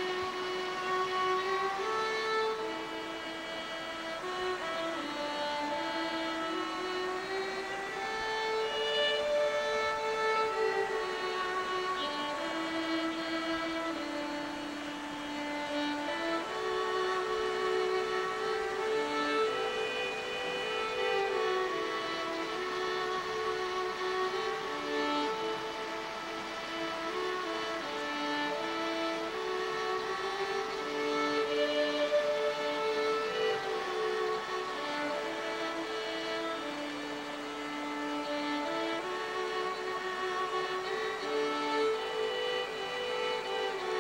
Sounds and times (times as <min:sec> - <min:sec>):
Music: 0:00.0 - 0:44.0.